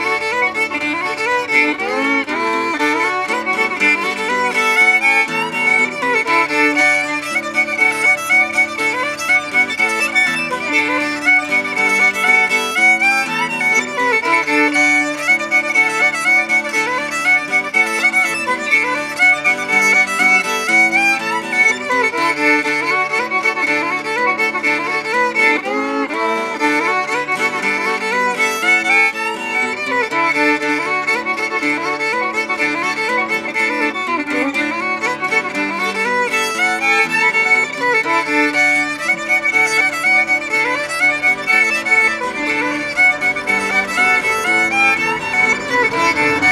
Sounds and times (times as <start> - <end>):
Violin, fiddle: 0.0 - 46.5.